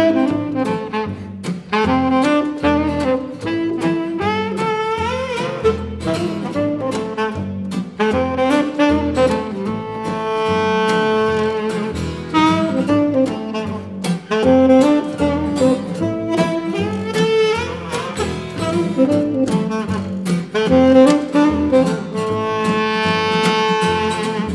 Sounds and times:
Music: 0.0s - 24.5s.

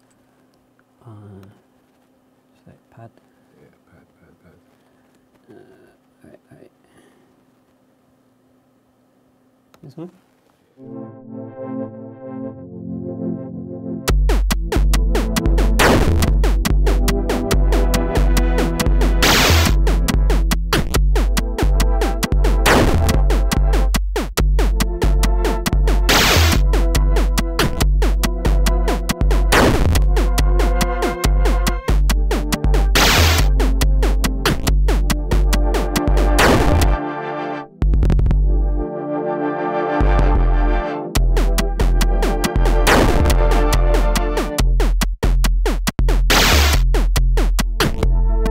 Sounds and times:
Synthesizer: 10.8s - 23.9s, 24.6s - 44.6s, 47.8s - 48.5s.

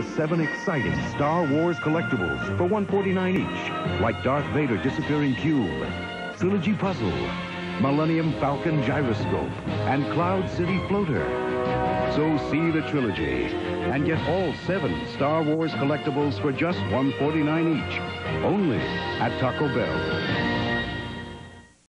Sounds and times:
Speech: 0.0s - 11.3s, 12.1s - 20.0s
Music: 0.0s - 21.9s.

